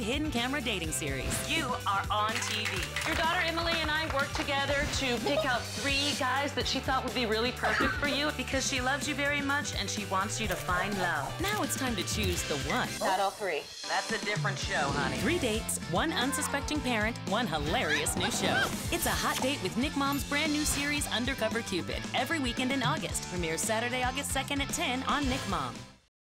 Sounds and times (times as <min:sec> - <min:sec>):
Speech: 0:00.0 - 0:25.8
Music: 0:00.0 - 0:26.1.